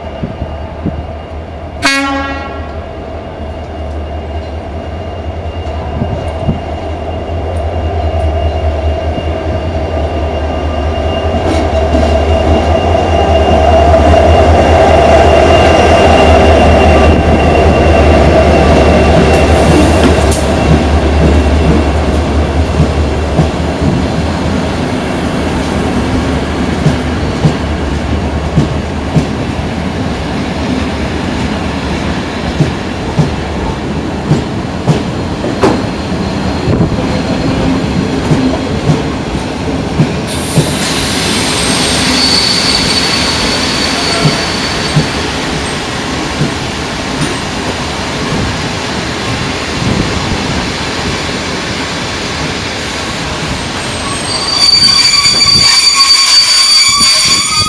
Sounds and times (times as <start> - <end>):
Railroad car, train wagon: 0.0 - 57.6
Train: 0.0 - 57.6
Train wheels squealing: 3.3 - 22.0, 35.3 - 38.0, 40.3 - 46.0, 53.5 - 57.6
Clickety-clack: 19.2 - 24.0, 28.4 - 29.4, 32.6 - 33.4, 34.3 - 35.9, 38.2 - 39.2, 40.0 - 40.8, 46.3 - 48.5.